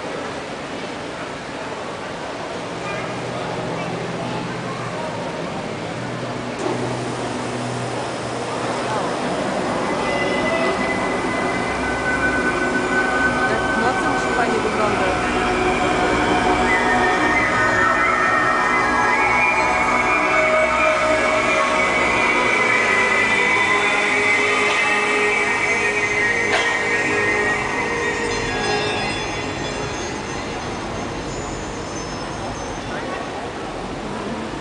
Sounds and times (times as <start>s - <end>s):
Waterfall: 0.0s - 34.6s
Music: 6.6s - 33.6s.